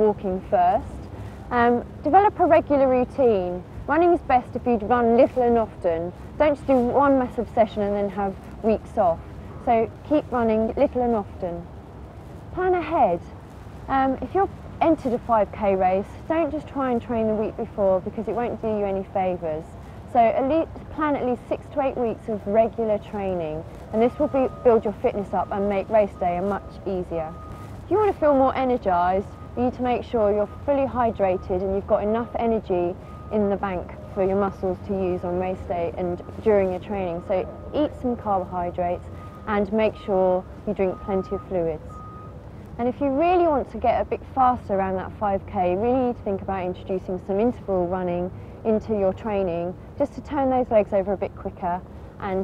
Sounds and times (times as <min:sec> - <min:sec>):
Speech: 0:00.0 - 0:11.7, 0:12.6 - 0:13.3, 0:13.9 - 0:41.8, 0:42.8 - 0:52.4
Outside, rural or natural: 0:00.0 - 0:52.4.